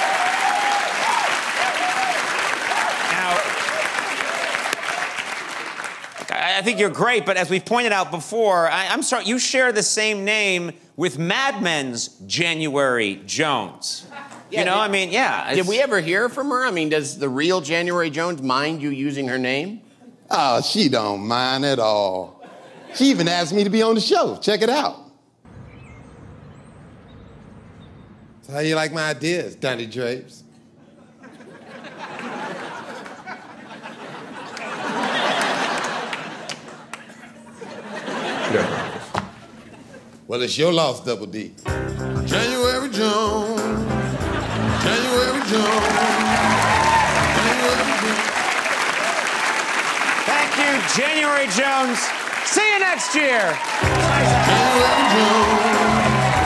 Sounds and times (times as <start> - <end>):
Applause: 0.0 - 6.7, 34.5 - 37.1, 45.4 - 56.4
Music: 41.6 - 48.3, 53.8 - 56.4
Speech: 50.3 - 53.6.